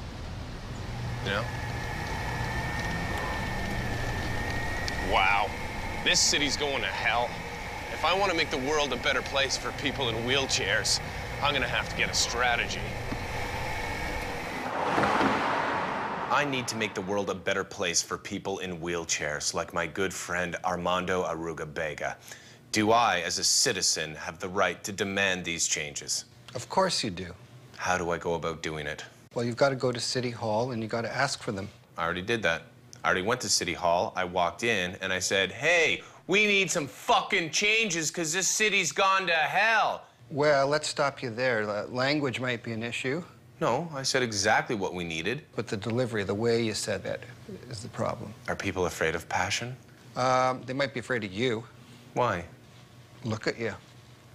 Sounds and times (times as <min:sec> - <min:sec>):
Speech: 0:05.0 - 0:12.9, 0:16.3 - 0:52.6, 0:53.2 - 0:53.8.